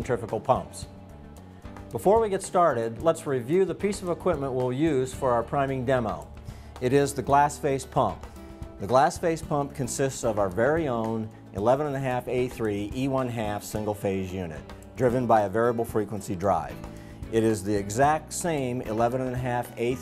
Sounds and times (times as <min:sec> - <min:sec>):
Speech: 0:00.0 - 0:00.9, 0:01.9 - 0:08.2, 0:08.8 - 0:20.0
Music: 0:00.0 - 0:20.0.